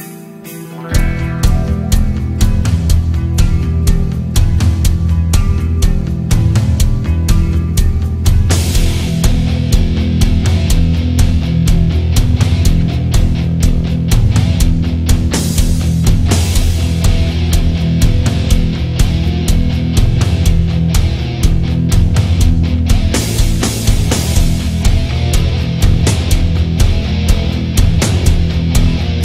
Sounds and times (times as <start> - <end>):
Drum kit: 0.5 - 29.2
Drum: 0.8 - 29.2.